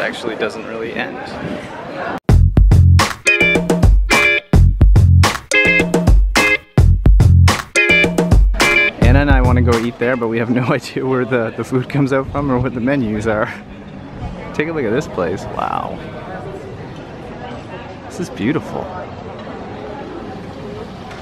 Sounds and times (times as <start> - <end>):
Speech: 0.0 - 2.2, 9.0 - 13.7, 14.4 - 21.1
Music: 2.3 - 10.1.